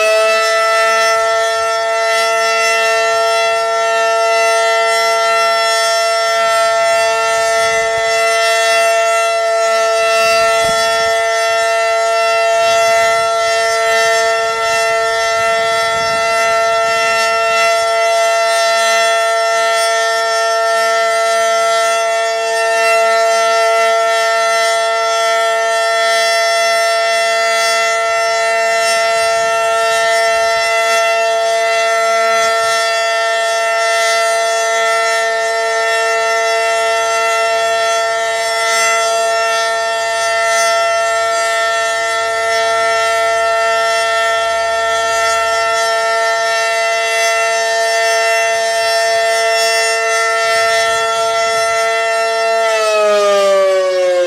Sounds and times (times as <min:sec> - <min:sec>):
Civil defense siren: 0:00.0 - 0:54.2.